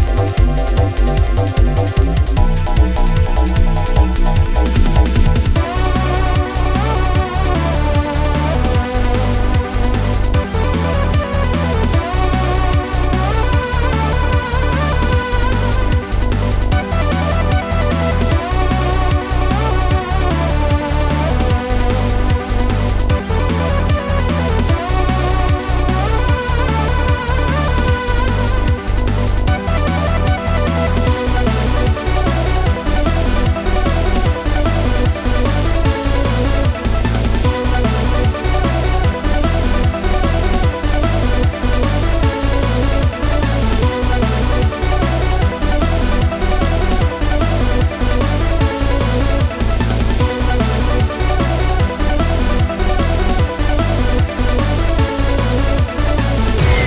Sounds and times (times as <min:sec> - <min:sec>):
Music: 0:00.0 - 0:56.8.